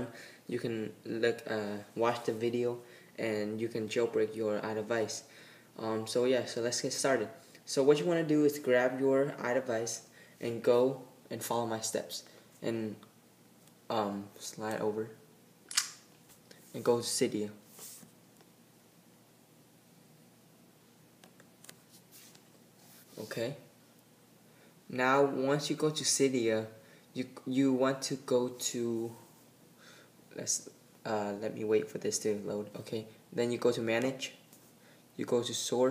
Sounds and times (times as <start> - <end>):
Speech: 0.0 - 13.1, 13.9 - 15.2, 16.7 - 17.7, 23.2 - 23.7, 24.9 - 29.3, 30.3 - 34.4, 35.2 - 35.9
Inside, small room: 0.0 - 35.9.